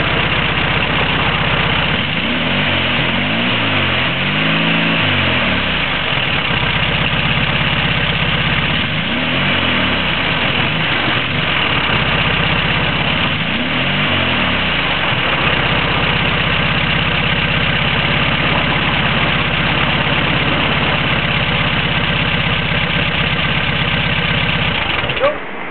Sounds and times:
Heavy engine (low frequency): 0:00.0 - 0:25.7
Vehicle: 0:00.0 - 0:25.7.

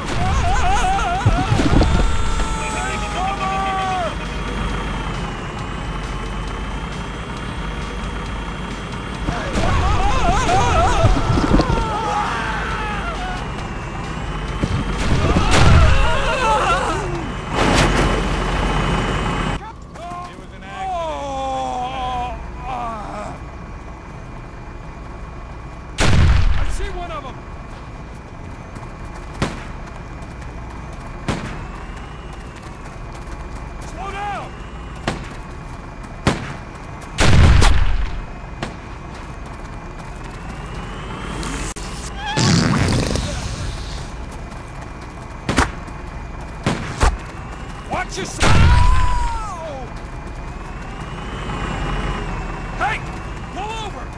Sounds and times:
Artillery fire: 0:14.6 - 0:16.4, 0:26.0 - 0:27.0, 0:29.4 - 0:29.8, 0:31.2 - 0:31.7, 0:36.2 - 0:38.8, 0:42.3 - 0:44.0, 0:46.6 - 0:47.2, 0:48.4 - 0:49.4.

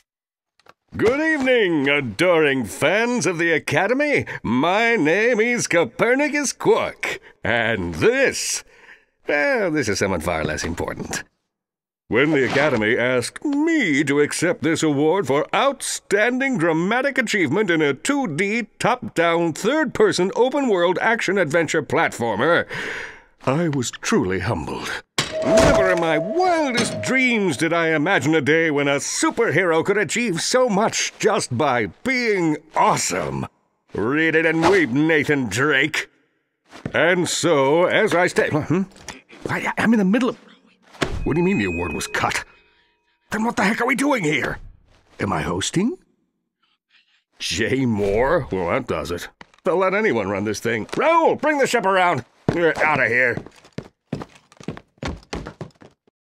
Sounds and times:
Speech: 0:01.0 - 0:08.7, 0:09.3 - 0:11.3, 0:12.1 - 0:22.7, 0:23.4 - 0:36.1, 0:36.9 - 0:40.5, 0:41.3 - 0:42.5, 0:43.3 - 0:44.6, 0:45.2 - 0:46.1, 0:47.4 - 0:53.4.

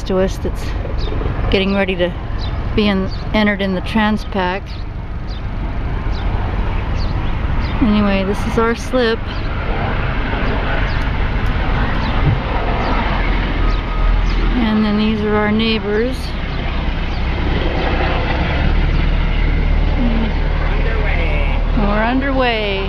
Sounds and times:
Vehicle: 0:00.0 - 0:22.8
Speech: 0:07.8 - 0:09.2, 0:14.6 - 0:16.4, 0:20.0 - 0:22.8.

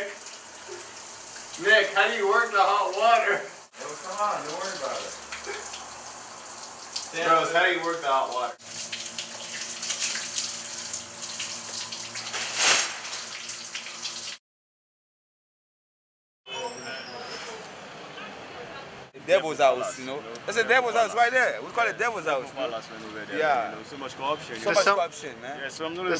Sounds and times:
Water: 0:00.0 - 0:14.4
Water tap, faucet: 0:00.0 - 0:14.4.

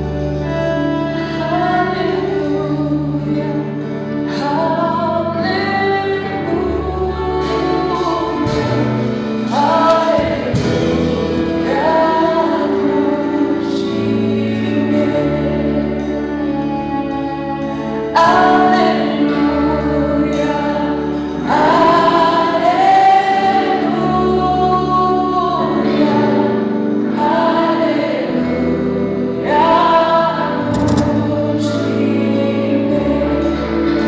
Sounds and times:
Music: 0:00.0 - 0:34.0
Female singing: 0:00.2 - 0:16.8, 0:17.9 - 0:34.0.

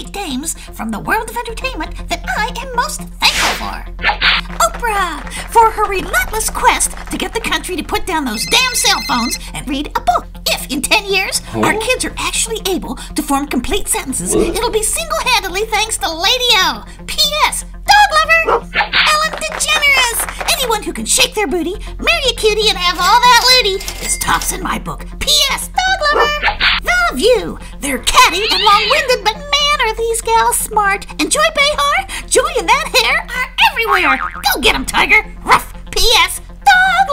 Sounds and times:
Speech: 0:00.0 - 0:03.9, 0:04.6 - 0:18.5, 0:19.1 - 0:37.1
Music: 0:00.0 - 0:37.1.

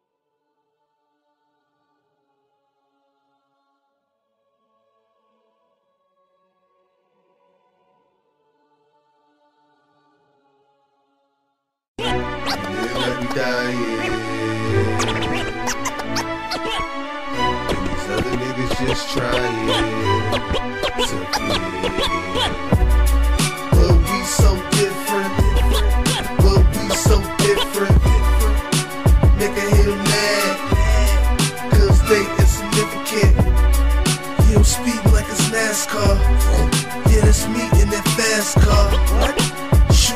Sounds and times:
Background music: 0:12.0 - 0:40.1
Theme music: 0:12.0 - 0:40.1.

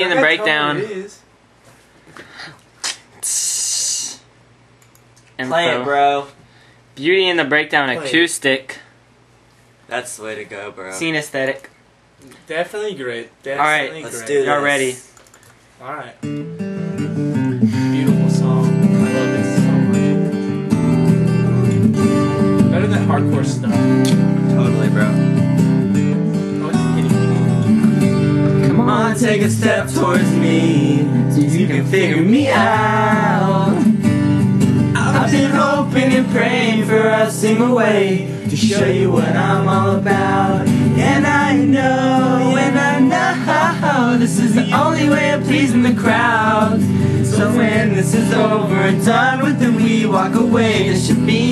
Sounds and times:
Strum: 0:16.2 - 0:51.5
Singing: 0:28.6 - 0:33.9, 0:35.0 - 0:51.5.

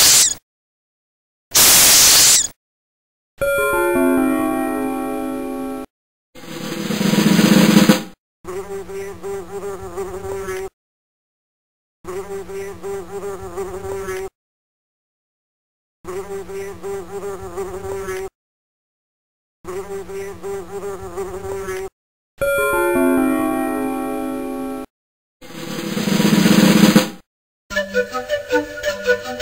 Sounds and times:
Bee, wasp, etc.: 0:08.5 - 0:10.8, 0:12.1 - 0:14.4, 0:16.1 - 0:18.4, 0:19.7 - 0:22.0
Fly, housefly: 0:08.5 - 0:10.8, 0:12.1 - 0:14.4, 0:16.1 - 0:18.4, 0:19.7 - 0:22.0.

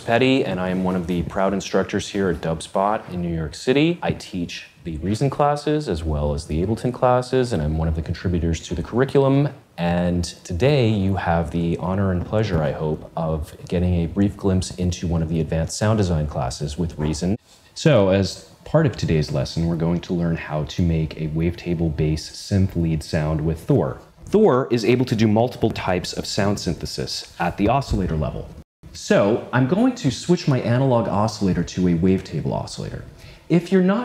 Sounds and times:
Speech: 0:00.0 - 0:34.0.

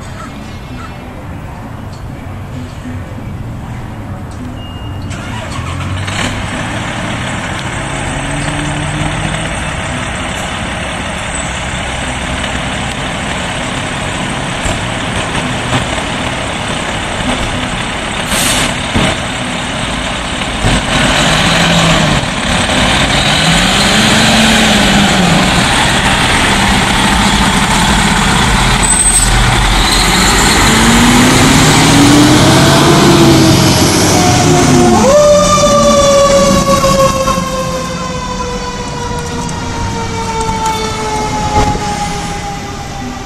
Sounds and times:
Fire engine, fire truck (siren): 0:19.9 - 0:43.2.

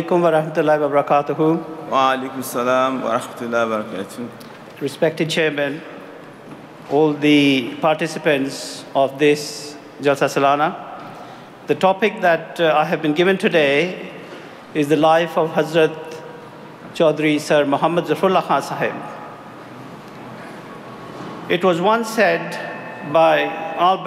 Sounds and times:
Male speech, man speaking: 0:00.0 - 0:05.8, 0:06.9 - 0:10.8, 0:11.7 - 0:14.0, 0:14.8 - 0:16.2, 0:17.0 - 0:19.0, 0:21.5 - 0:24.0.

